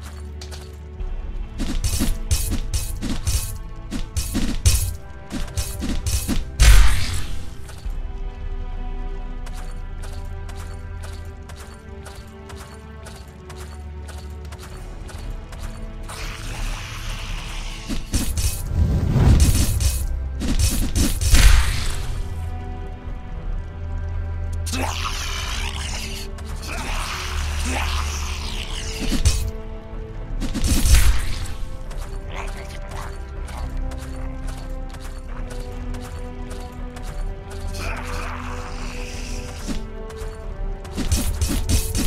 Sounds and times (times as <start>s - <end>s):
Music: 0.0s - 42.0s.